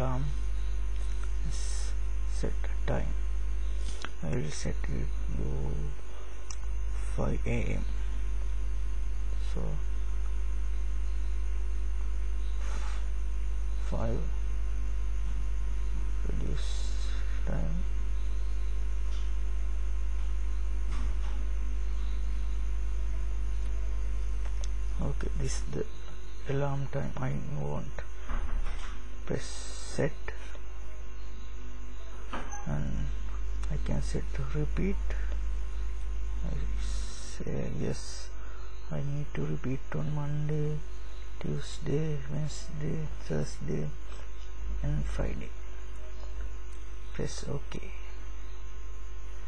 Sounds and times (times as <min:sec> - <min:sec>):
Speech: 0:00.0 - 0:00.4, 0:01.4 - 0:03.2, 0:04.2 - 0:06.0, 0:07.0 - 0:07.9, 0:09.4 - 0:09.9, 0:13.8 - 0:14.4, 0:16.2 - 0:17.9, 0:25.0 - 0:28.1, 0:29.3 - 0:30.4, 0:32.7 - 0:35.3, 0:36.5 - 0:44.0, 0:44.8 - 0:45.6, 0:47.2 - 0:48.1.